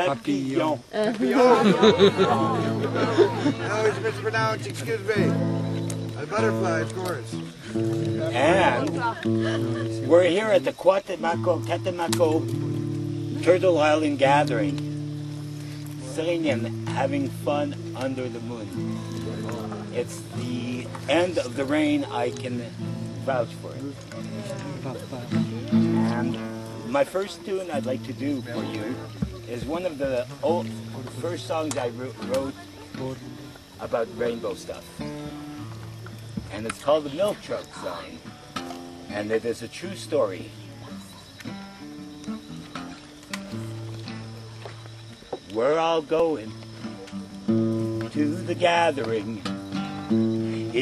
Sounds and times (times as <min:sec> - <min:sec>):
Music: 0:02.0 - 0:50.8.